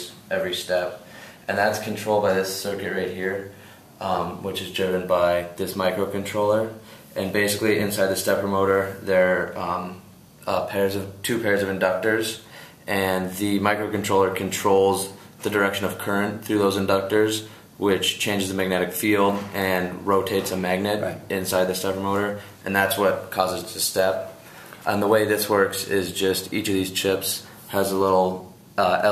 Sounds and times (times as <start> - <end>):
Speech: 0.0 - 29.1.